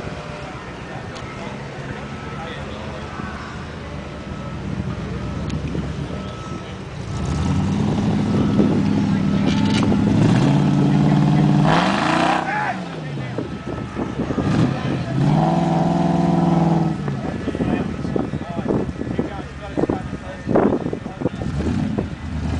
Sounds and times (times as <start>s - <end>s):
Reversing beeps: 4.3s - 6.8s.